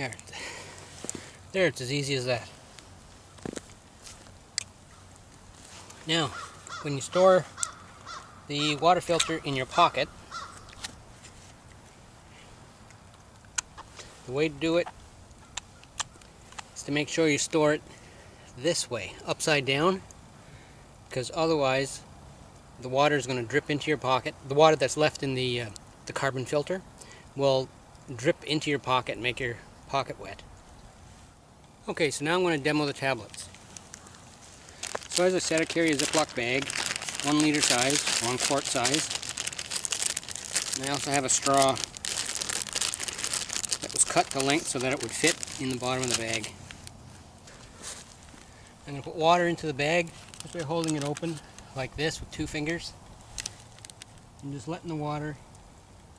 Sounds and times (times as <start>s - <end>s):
Speech: 0.0s - 0.2s, 1.5s - 2.5s, 6.0s - 7.5s, 8.5s - 10.1s, 14.3s - 14.9s, 16.8s - 17.8s, 18.6s - 20.0s, 21.1s - 22.0s, 22.8s - 26.8s, 27.4s - 30.4s, 31.8s - 33.5s, 35.1s - 39.1s, 40.8s - 41.9s, 43.8s - 46.6s, 48.8s - 53.0s, 54.4s - 55.4s
Caw: 6.3s - 8.4s, 10.2s - 10.7s.